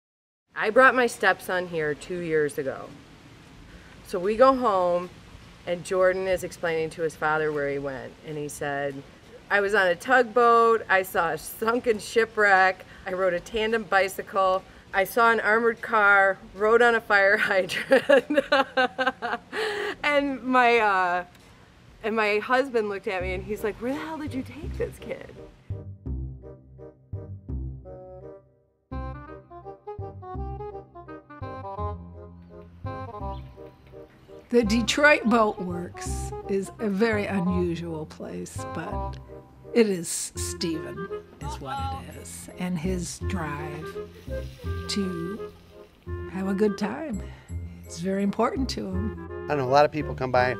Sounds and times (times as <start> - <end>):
Music: 22.5 - 50.5.